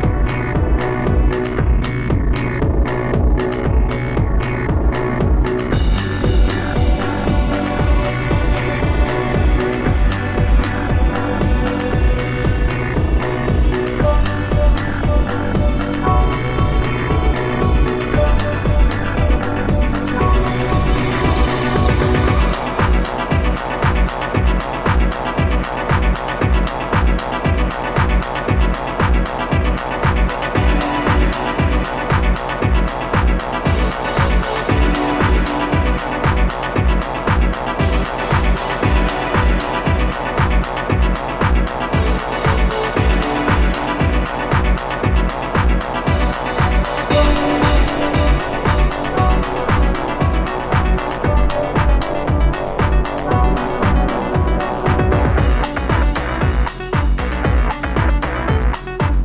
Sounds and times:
Pop music: 0:04.8 - 0:59.2.

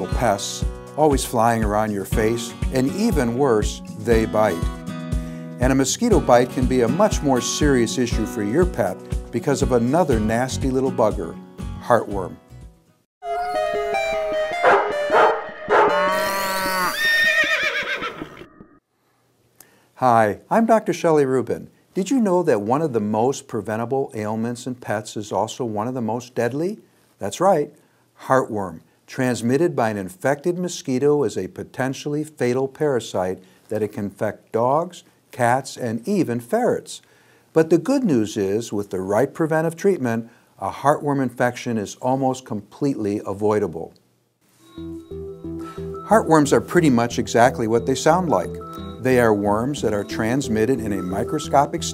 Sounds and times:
Bow-wow: 0:14.6 - 0:16.3.

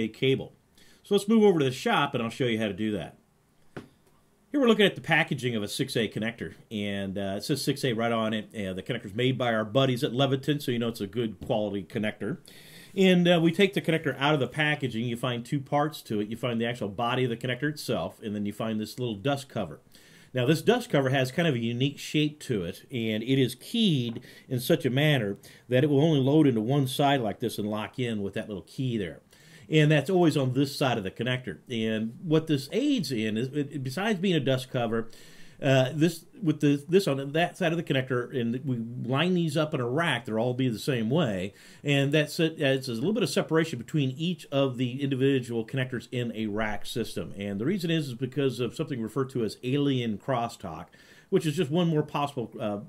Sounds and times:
Speech: 0:00.0 - 0:03.2, 0:04.5 - 0:12.4, 0:13.0 - 0:19.8, 0:20.4 - 0:52.8.

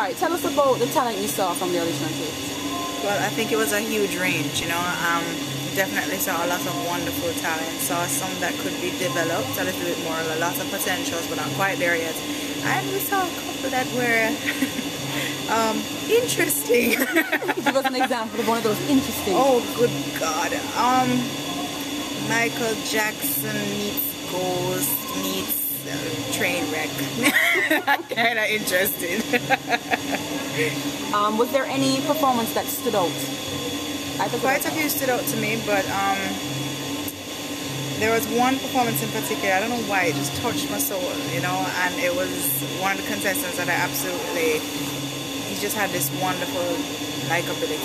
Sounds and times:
Speech: 0:03.0 - 0:14.4, 0:15.4 - 0:21.4, 0:22.2 - 0:27.3, 0:28.0 - 0:29.5, 0:30.6 - 0:33.3, 0:34.2 - 0:36.4, 0:38.0 - 0:44.6, 0:45.5 - 0:47.8.

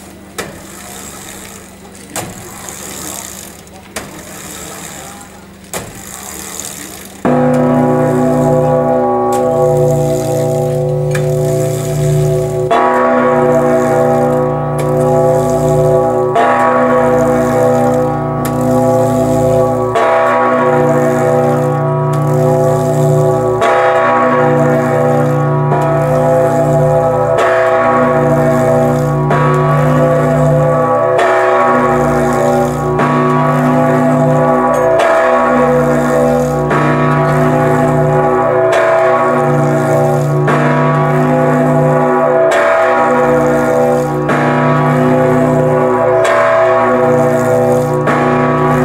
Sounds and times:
Bell: 0:07.2 - 0:48.8.

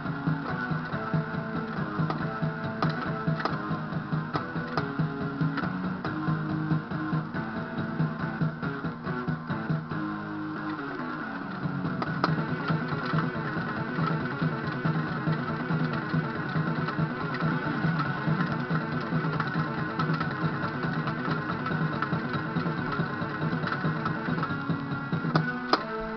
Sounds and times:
Bass guitar: 0:00.0 - 0:26.1.

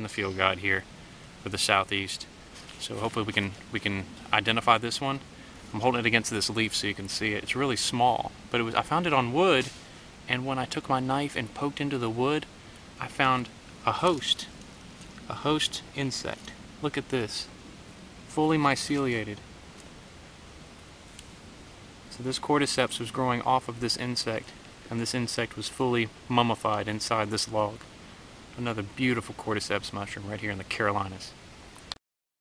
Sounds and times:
Speech: 0:00.0 - 0:14.5, 0:15.3 - 0:17.5, 0:18.3 - 0:19.4, 0:22.1 - 0:27.8, 0:28.6 - 0:31.4.

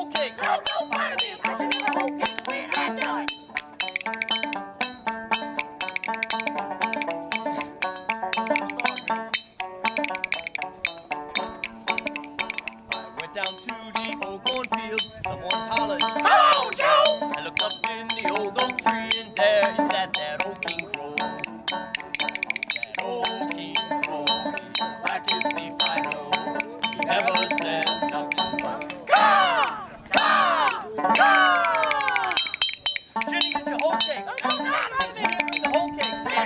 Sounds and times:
Music: 0:00.0 - 0:36.4.

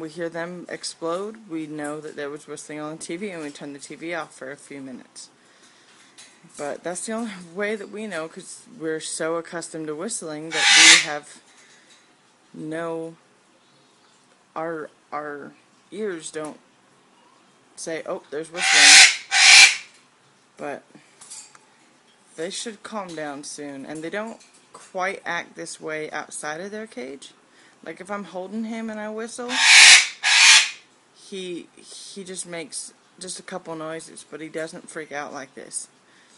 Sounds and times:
Speech: 0:00.0 - 0:05.4, 0:06.5 - 0:11.4, 0:12.6 - 0:13.2, 0:14.6 - 0:16.6, 0:17.8 - 0:19.0, 0:20.6 - 0:21.0, 0:22.4 - 0:29.6, 0:31.2 - 0:36.0
Inside, small room: 0:00.0 - 0:36.3
Bird: 0:10.5 - 0:11.1, 0:18.6 - 0:19.9, 0:29.5 - 0:30.8
Domestic animals, pets: 0:10.6 - 0:11.1, 0:18.6 - 0:19.8, 0:29.5 - 0:30.8.

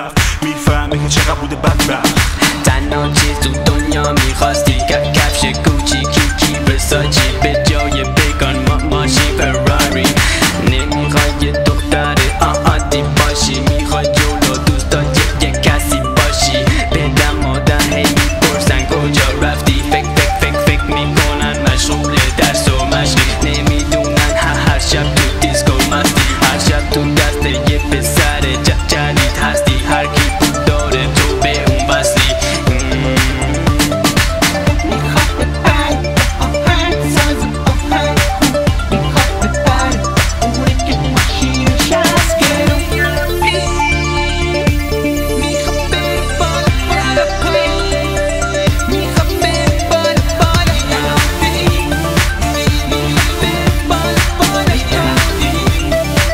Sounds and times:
Afrobeat: 0:00.0 - 0:56.3.

